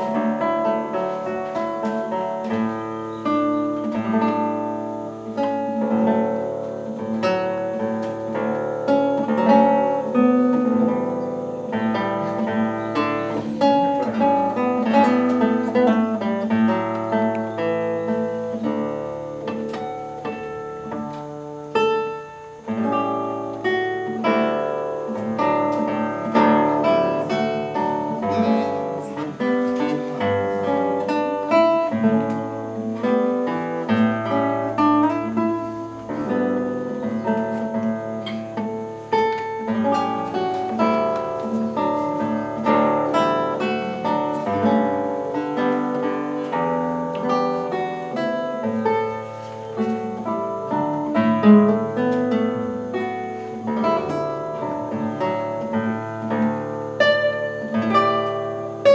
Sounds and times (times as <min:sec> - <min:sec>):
Acoustic guitar: 0:00.0 - 0:58.9
Strum: 0:00.0 - 0:58.9.